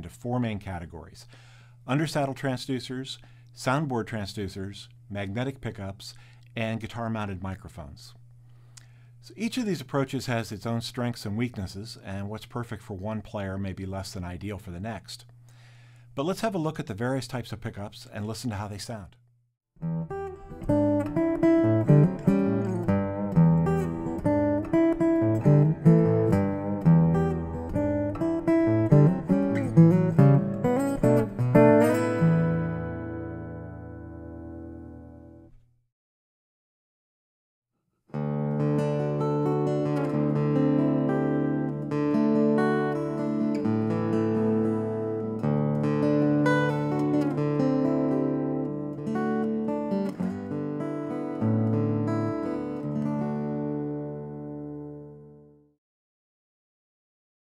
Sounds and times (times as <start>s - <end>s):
Acoustic guitar: 19.8s - 35.5s, 38.1s - 55.5s.